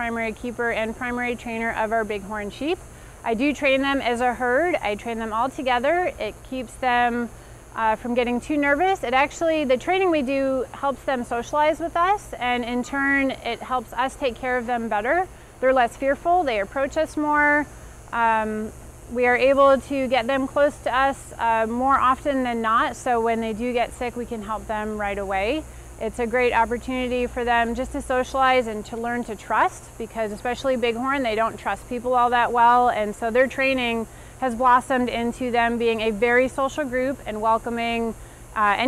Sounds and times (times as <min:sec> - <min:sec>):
Speech: 0:00.0 - 0:38.8.